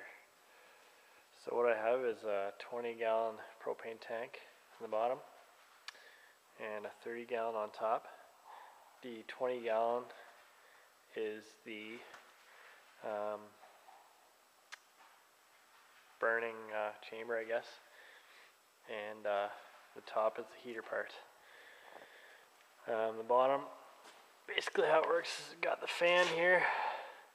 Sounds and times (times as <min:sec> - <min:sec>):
Speech: 0:01.4 - 0:05.4, 0:06.6 - 0:08.3, 0:09.0 - 0:10.3, 0:11.1 - 0:12.2, 0:13.0 - 0:13.6, 0:16.2 - 0:17.9, 0:18.9 - 0:21.3, 0:22.8 - 0:23.8, 0:24.5 - 0:27.1.